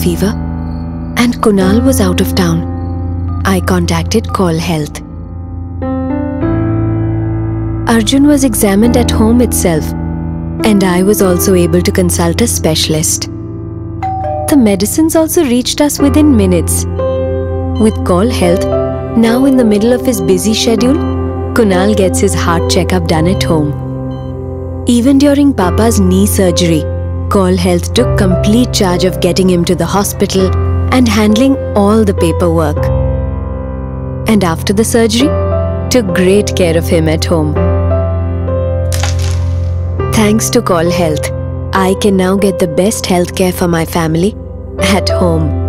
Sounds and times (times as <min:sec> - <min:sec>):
Speech: 0:00.0 - 0:00.4, 0:01.2 - 0:02.7, 0:03.4 - 0:05.0, 0:07.9 - 0:10.0, 0:10.6 - 0:13.3, 0:14.5 - 0:16.9, 0:17.8 - 0:21.0, 0:21.6 - 0:23.8, 0:24.9 - 0:33.0, 0:34.3 - 0:37.6, 0:40.2 - 0:45.6
Music: 0:00.0 - 0:45.6.